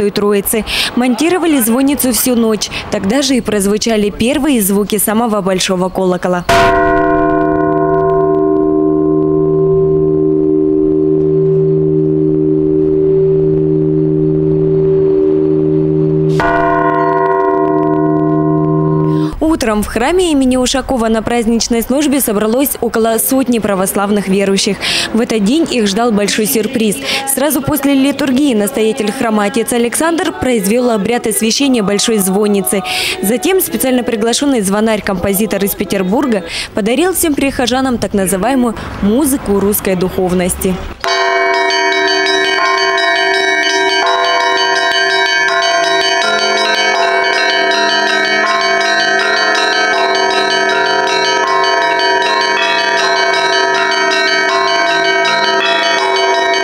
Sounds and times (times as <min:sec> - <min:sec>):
Speech: 0:00.0 - 0:06.5, 0:19.3 - 0:40.9
Bell: 0:06.5 - 0:19.4, 0:41.0 - 0:56.6.